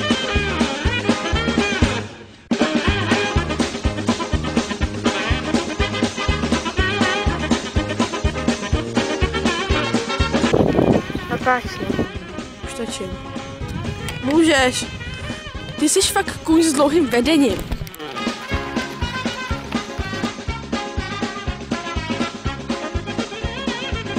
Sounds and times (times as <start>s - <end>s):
Music: 0.0s - 24.1s
Speech: 11.3s - 13.2s, 15.8s - 17.6s
Clip-clop: 13.1s - 20.6s.